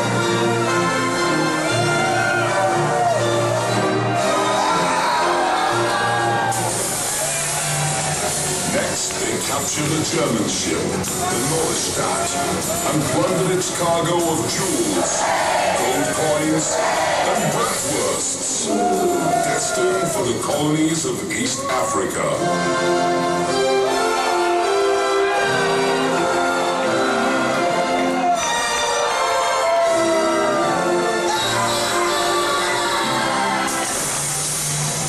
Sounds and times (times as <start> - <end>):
Music: 0.0 - 35.0
Speech: 8.7 - 15.2, 15.8 - 22.4.